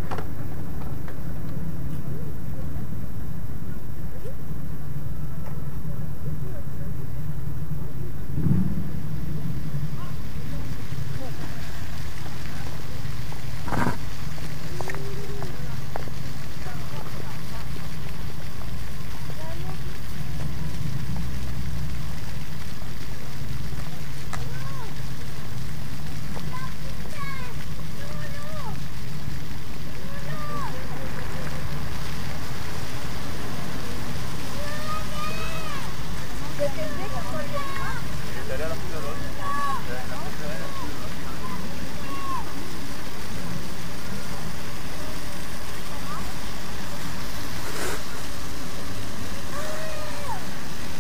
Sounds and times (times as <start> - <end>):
Speech: 5.4 - 7.4, 26.4 - 28.8, 30.0 - 31.7, 34.6 - 42.5.